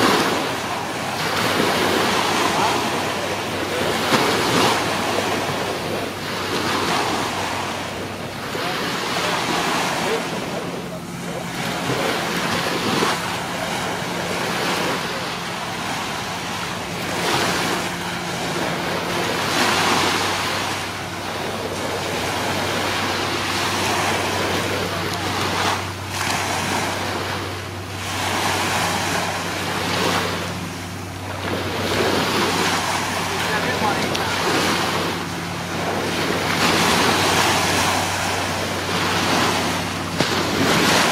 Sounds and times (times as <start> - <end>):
Speech: 0.0 - 1.5, 2.2 - 5.8, 8.4 - 12.4, 33.2 - 35.0.